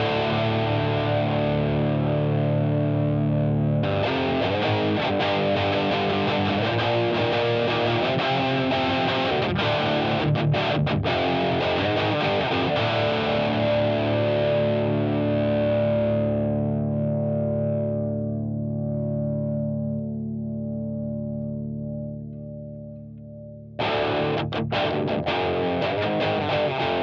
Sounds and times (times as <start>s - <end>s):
Bass guitar: 0.0s - 27.0s
Electric guitar: 0.0s - 27.0s.